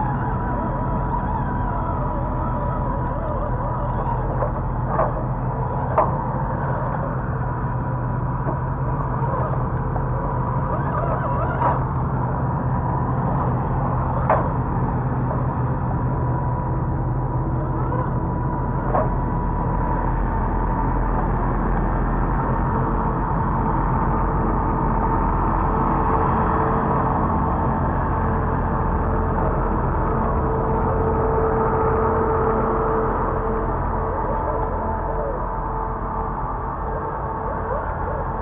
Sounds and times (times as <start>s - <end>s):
Truck: 0.0s - 38.4s.